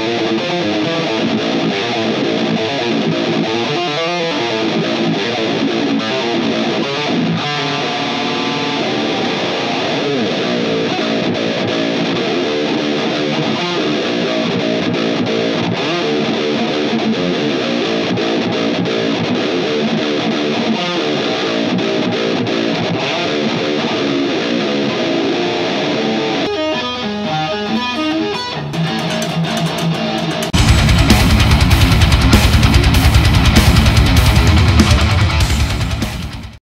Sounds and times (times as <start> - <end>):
Electric guitar: 0.0 - 36.6.